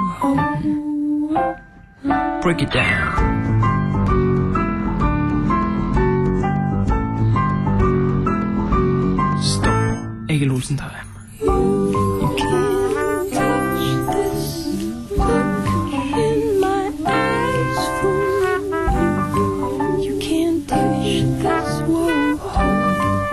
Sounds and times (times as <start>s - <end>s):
Keyboard (musical): 0.0s - 23.3s.